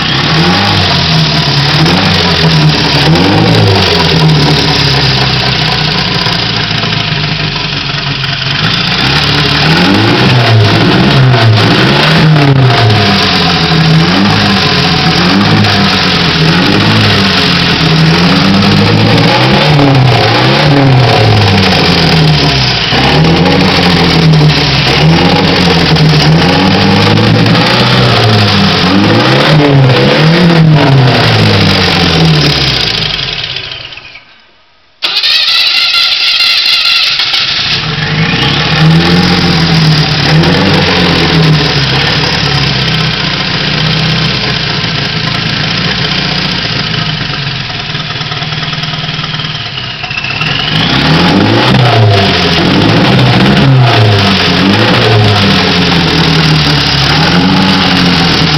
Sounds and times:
Vehicle: 0.0s - 34.3s, 35.0s - 58.5s
Medium engine (mid frequency): 0.0s - 58.5s
Engine starting: 35.0s - 38.6s.

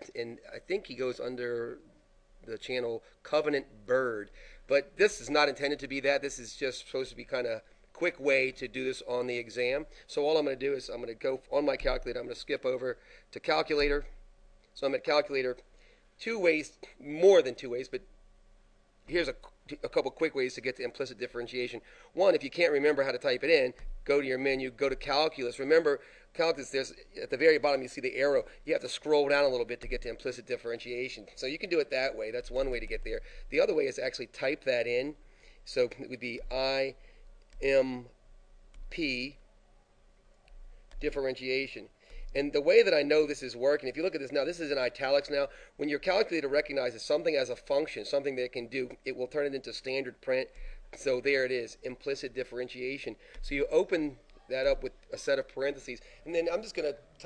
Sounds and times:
Speech: 0.0s - 14.2s, 14.8s - 18.1s, 19.1s - 37.0s, 37.6s - 38.2s, 38.9s - 39.4s, 41.0s - 57.2s.

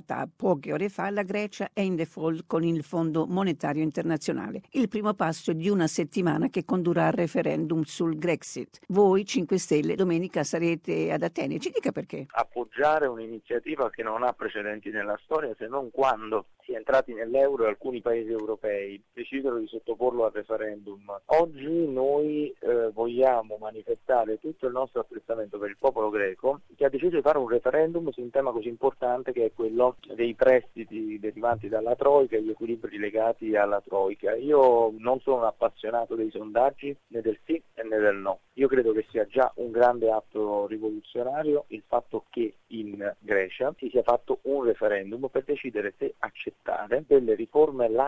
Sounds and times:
Speech: 0.0s - 48.0s
Radio: 12.4s - 48.0s.

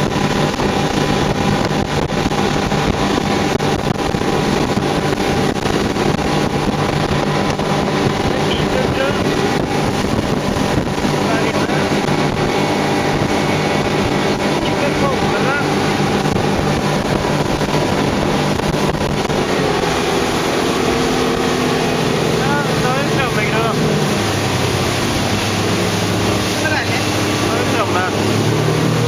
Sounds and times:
Motorboat, speedboat: 0.0s - 29.0s
Speech: 8.5s - 9.2s, 14.6s - 15.7s, 22.4s - 23.8s, 26.6s - 28.2s.

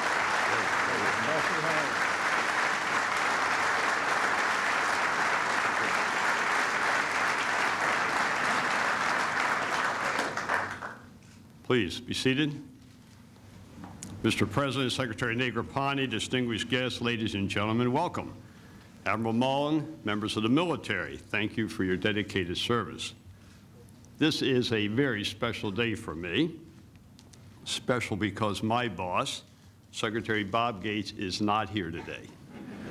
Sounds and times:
Male speech, man speaking: 1.0s - 1.9s, 11.7s - 12.7s, 14.2s - 18.4s, 19.1s - 23.2s, 24.2s - 26.6s, 27.7s - 32.4s
Narration, monologue: 11.1s - 32.5s.

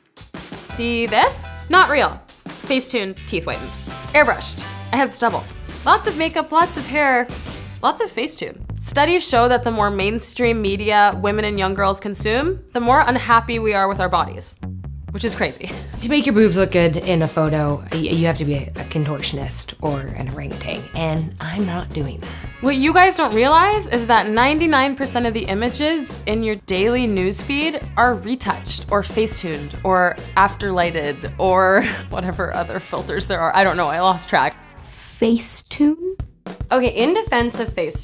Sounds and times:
Music: 0.0s - 38.0s
Speech: 0.7s - 14.6s, 15.2s - 38.0s.

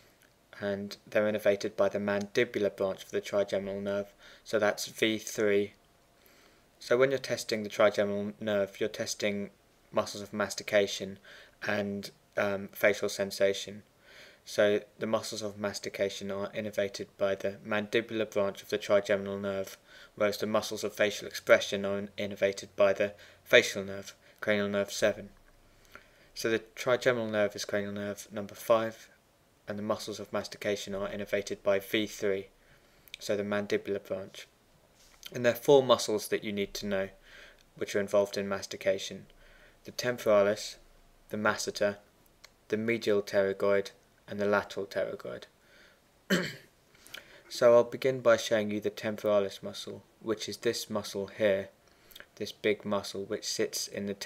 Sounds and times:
Speech: 0.6s - 5.8s, 6.8s - 13.9s, 14.5s - 25.4s, 26.4s - 32.5s, 33.2s - 34.5s, 35.2s - 37.2s, 37.8s - 39.3s, 39.9s - 42.1s, 42.7s - 45.5s, 47.5s - 51.8s, 52.4s - 54.2s.

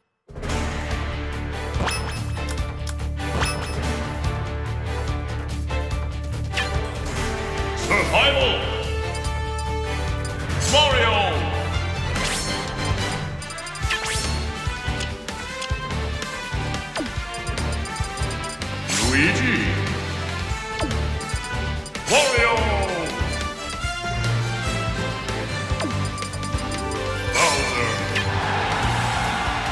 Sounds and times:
Music: 0.0s - 29.7s
Speech: 7.8s - 8.8s, 10.6s - 11.6s, 18.9s - 19.9s, 22.1s - 23.2s, 27.4s - 28.0s.

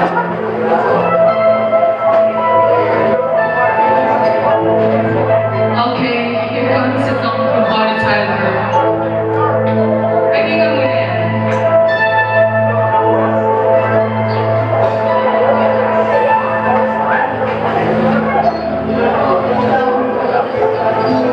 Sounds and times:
Music: 0.0s - 21.3s
Speech: 3.9s - 11.6s, 14.8s - 21.3s.

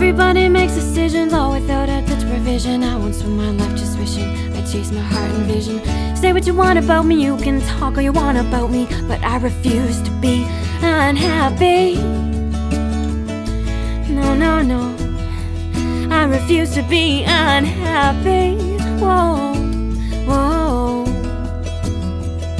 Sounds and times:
Music: 0.0s - 22.6s.

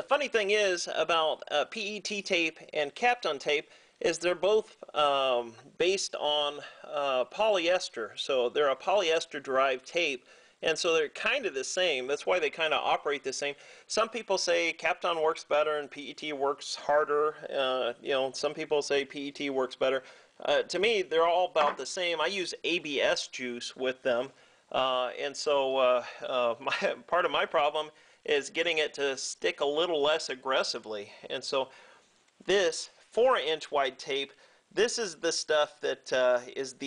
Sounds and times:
Speech: 0.0s - 31.7s, 32.4s - 36.8s.

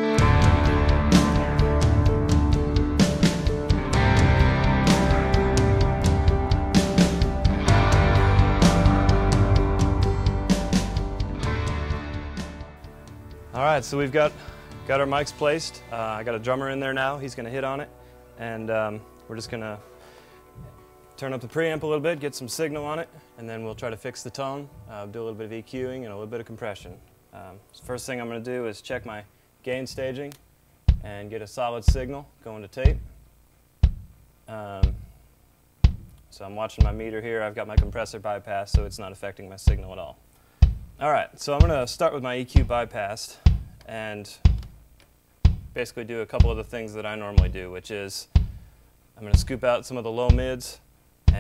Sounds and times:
Speech: 13.5s - 19.8s, 21.2s - 30.4s, 31.0s - 33.0s, 34.5s - 35.0s, 36.3s - 40.2s, 41.0s - 44.5s, 45.8s - 48.3s, 49.2s - 51.4s.

